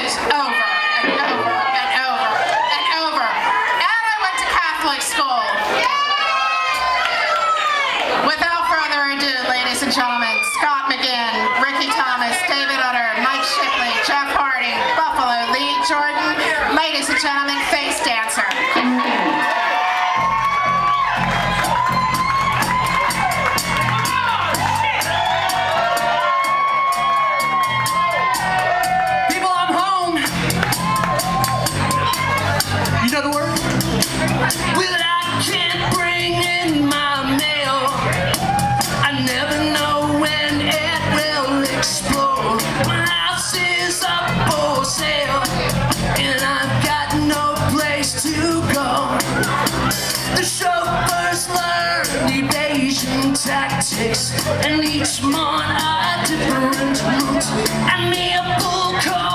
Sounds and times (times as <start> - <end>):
Speech: 0.0 - 5.6, 8.2 - 19.4.